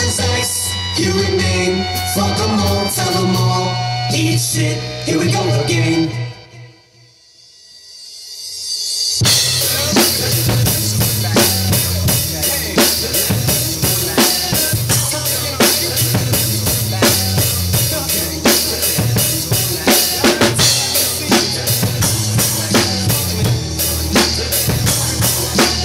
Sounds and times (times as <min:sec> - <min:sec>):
Drum kit: 0:00.0 - 0:05.4, 0:07.5 - 0:25.8
Cymbal: 0:06.9 - 0:13.7
Drum: 0:08.5 - 0:25.8.